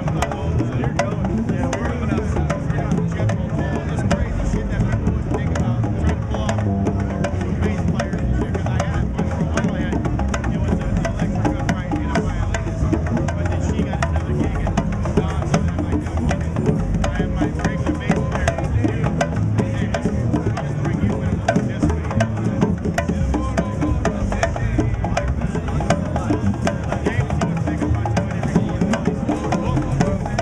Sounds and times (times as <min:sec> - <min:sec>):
Speech: 0:00.0 - 0:19.0, 0:19.6 - 0:22.5.